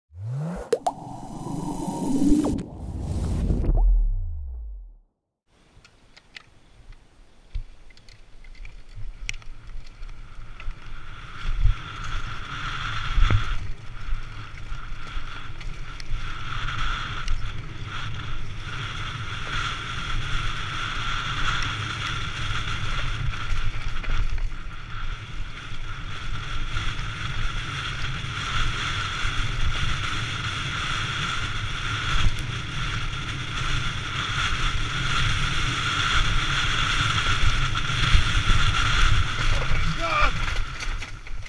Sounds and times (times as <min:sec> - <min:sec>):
Bicycle: 0:05.6 - 0:41.4.